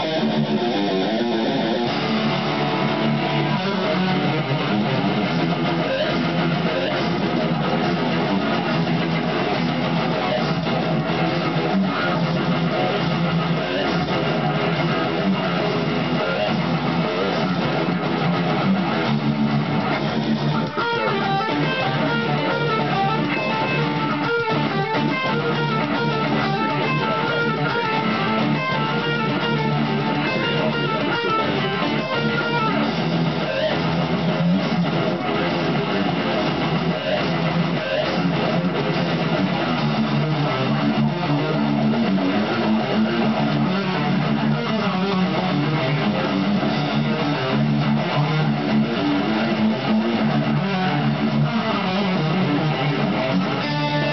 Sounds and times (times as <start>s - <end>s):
Electric guitar: 0.0s - 54.1s
Strum: 0.0s - 54.1s.